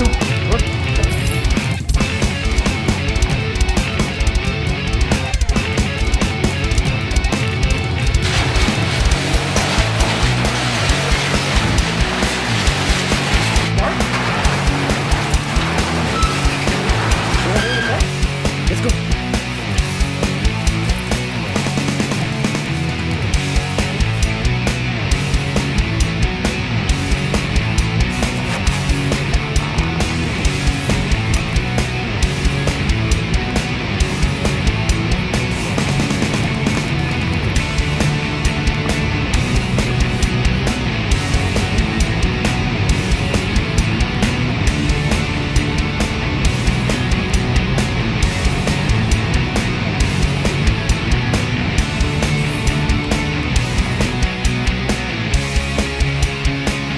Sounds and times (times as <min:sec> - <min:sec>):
Music: 0:00.0 - 0:56.9.